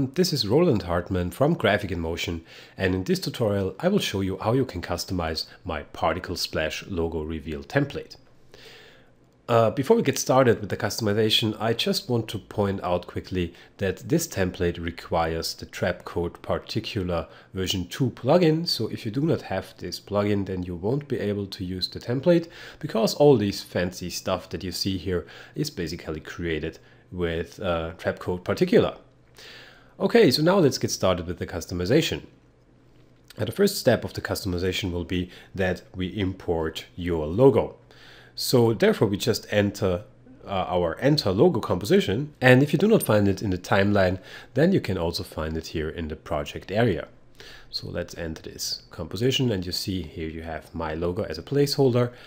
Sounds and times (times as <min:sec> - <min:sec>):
Speech: 0:00.0 - 0:08.2, 0:09.5 - 0:29.1, 0:30.0 - 0:32.4, 0:33.3 - 0:37.8, 0:38.4 - 0:52.2.